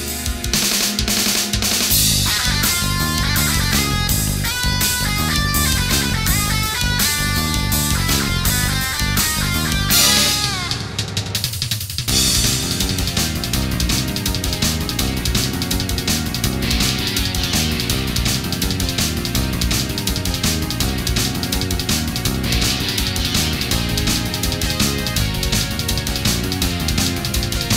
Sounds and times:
Theme music: 0.0 - 27.7.

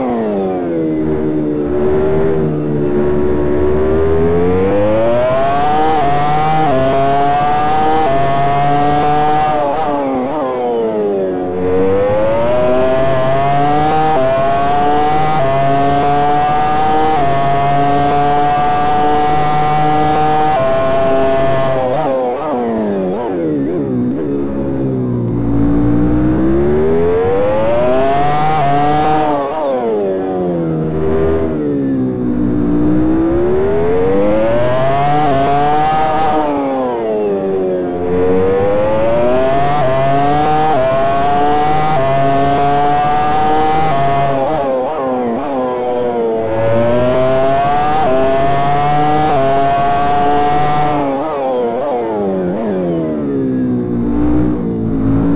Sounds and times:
Car: 0.0 - 55.3.

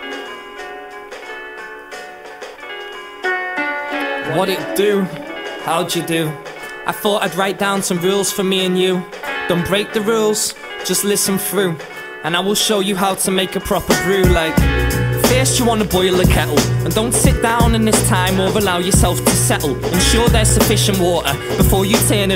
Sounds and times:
Rhythm and blues: 3.9 - 7.1, 13.7 - 22.3
Speech: 4.2 - 14.6.

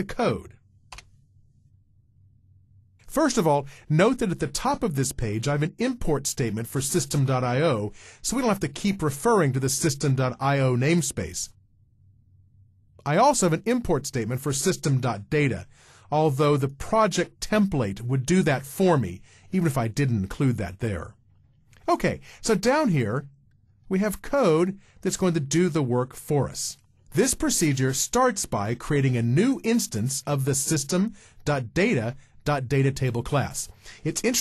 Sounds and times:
Speech: 0.0 - 0.6, 3.1 - 11.6, 13.0 - 21.2, 21.8 - 23.3, 23.9 - 34.4.

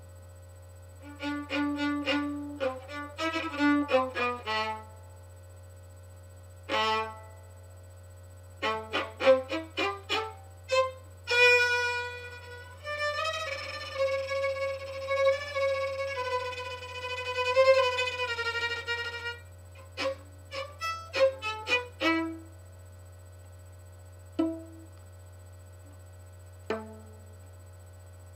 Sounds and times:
Violin, fiddle: 1.0 - 4.9, 6.7 - 7.2, 8.6 - 22.4.

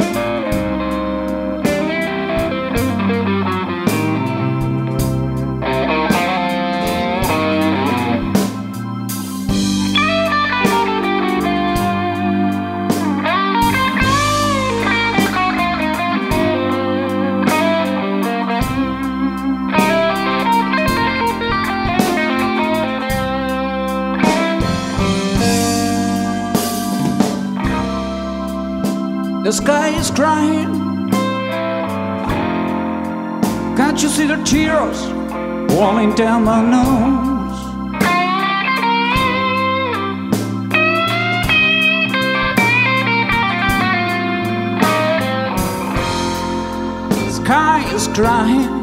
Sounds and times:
Music: 0.0 - 48.8.

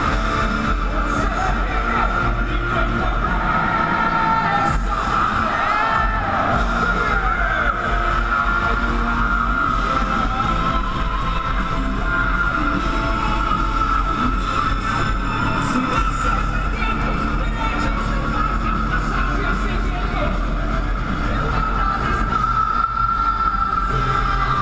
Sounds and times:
Music: 0.0 - 24.6.

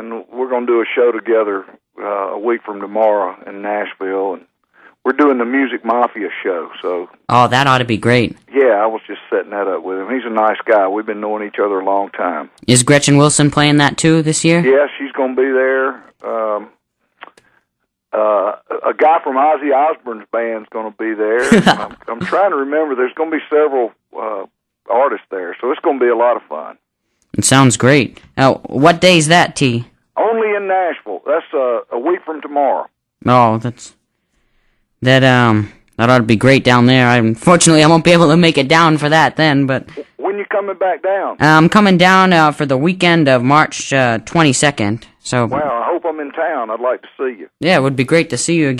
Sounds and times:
Speech: 0.0 - 4.5, 13.8 - 16.8, 18.2 - 26.8, 27.6 - 34.0, 35.0 - 48.7.

